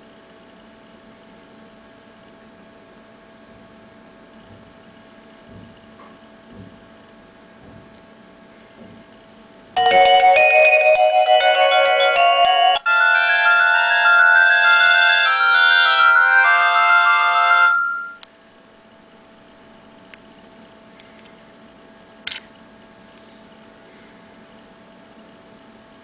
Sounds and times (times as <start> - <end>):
Music: 9.8 - 18.2.